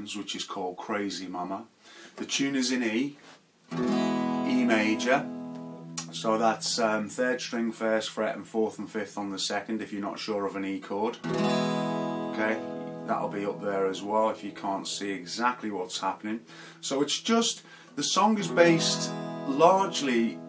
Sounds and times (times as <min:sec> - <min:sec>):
Speech: 0:00.0 - 0:03.2, 0:04.5 - 0:05.3, 0:06.0 - 0:11.2, 0:12.3 - 0:20.4
Acoustic guitar: 0:03.6 - 0:07.2, 0:11.1 - 0:20.4.